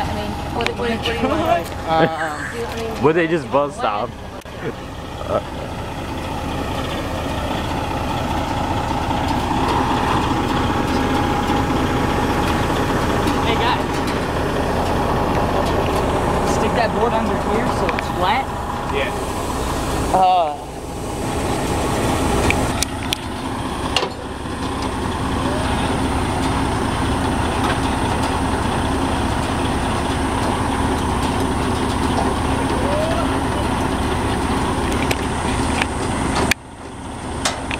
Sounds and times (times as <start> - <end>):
Outside, urban or manmade: 0.0 - 37.7
Truck: 0.0 - 37.7.